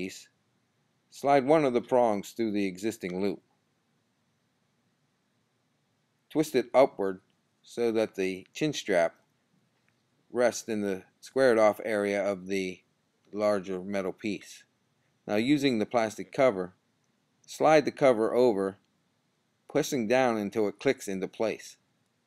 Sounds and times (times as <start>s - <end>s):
Speech: 0.0s - 0.4s, 1.1s - 3.5s, 6.3s - 9.2s, 10.3s - 14.7s, 15.3s - 16.8s, 17.5s - 18.9s, 19.7s - 21.8s.